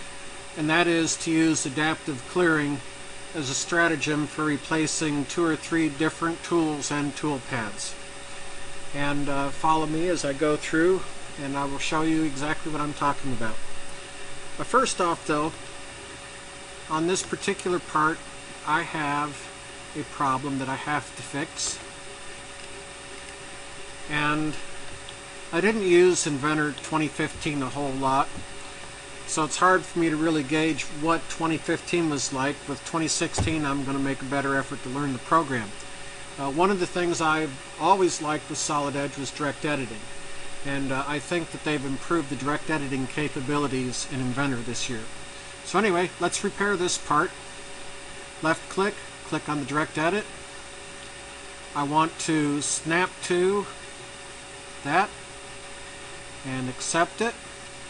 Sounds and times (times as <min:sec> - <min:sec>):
Speech: 0:00.6 - 0:08.0, 0:08.9 - 0:13.6, 0:14.6 - 0:15.6, 0:16.9 - 0:21.8, 0:24.1 - 0:24.6, 0:25.5 - 0:28.4, 0:29.3 - 0:35.8, 0:36.4 - 0:47.4, 0:48.4 - 0:50.3, 0:51.8 - 0:53.8, 0:54.8 - 0:55.2, 0:56.4 - 0:57.4.